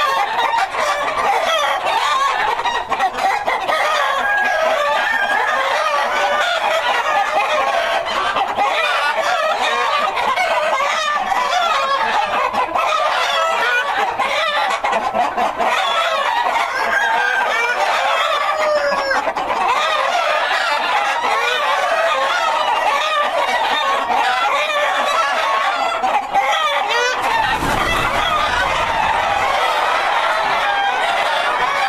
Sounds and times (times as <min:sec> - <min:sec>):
Cluck: 0:00.0 - 0:31.8.